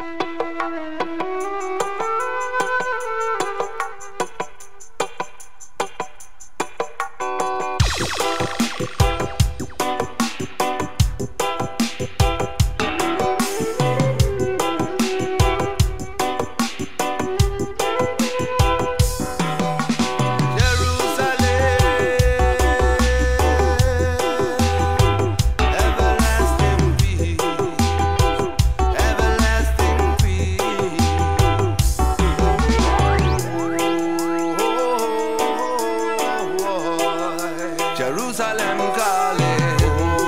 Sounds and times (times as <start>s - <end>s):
Funk: 0.0s - 40.2s
Reggae: 0.0s - 40.2s.